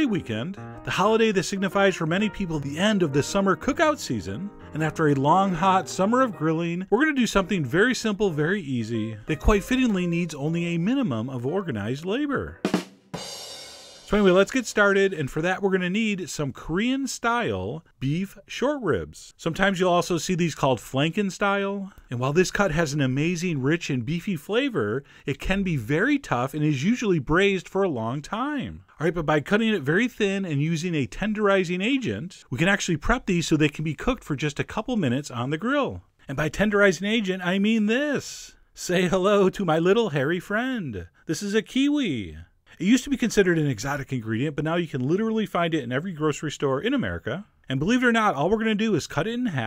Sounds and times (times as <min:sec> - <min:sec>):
Speech: 0:00.0 - 0:12.6, 0:14.1 - 0:49.6.